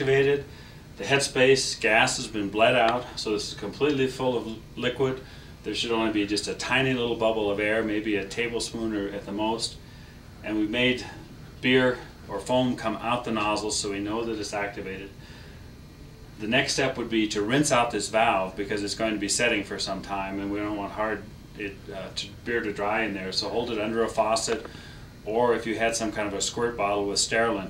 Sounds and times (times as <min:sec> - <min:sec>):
Speech: 0:00.0 - 0:09.8, 0:10.4 - 0:15.2, 0:16.4 - 0:27.6.